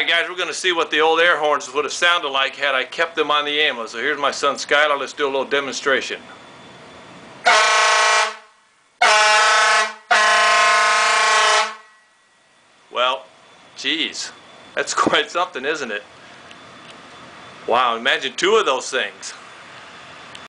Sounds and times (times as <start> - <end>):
Speech: 0.0 - 6.3, 12.9 - 16.1, 17.7 - 19.4
Vehicle horn, car horn, honking: 7.4 - 12.1.